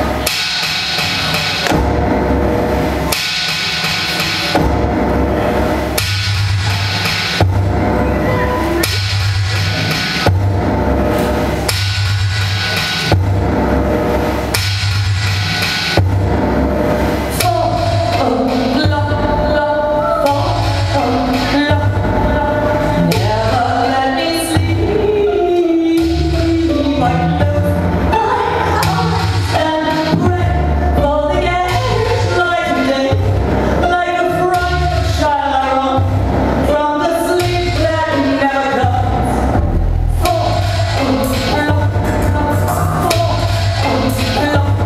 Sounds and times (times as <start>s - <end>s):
Music: 0.0s - 44.8s.